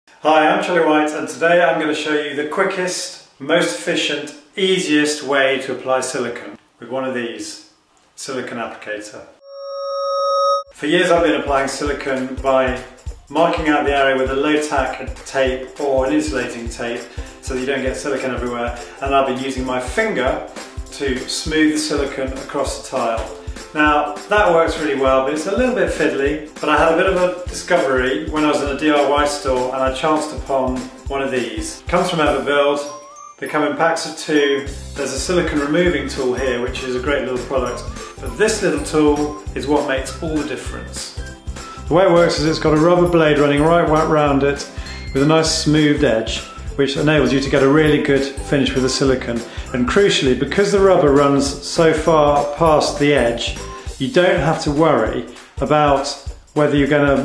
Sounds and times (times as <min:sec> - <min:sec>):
Speech: 0:00.2 - 0:09.3, 0:10.8 - 0:41.2, 0:41.9 - 0:57.2.